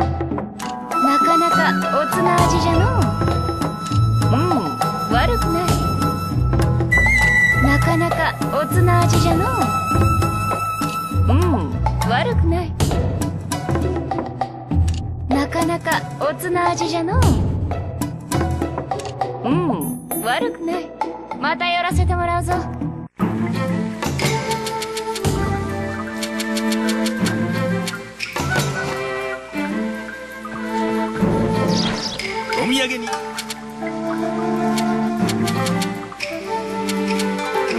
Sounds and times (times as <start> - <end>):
Music: 0.0 - 37.7
Speech: 11.3 - 12.7, 21.4 - 22.7.